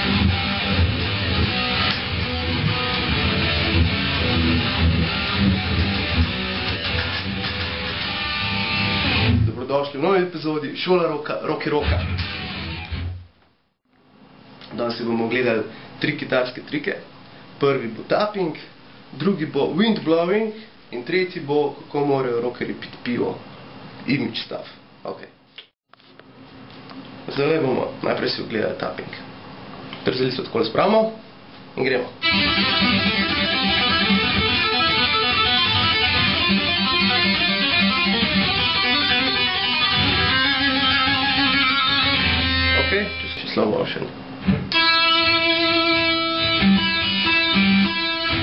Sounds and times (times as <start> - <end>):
Strum: 0.0 - 9.5, 32.2 - 43.4, 44.4 - 48.4
Speech: 9.4 - 12.1, 14.7 - 23.4, 24.0 - 25.4, 27.3 - 29.3, 30.0 - 32.2, 42.8 - 44.2.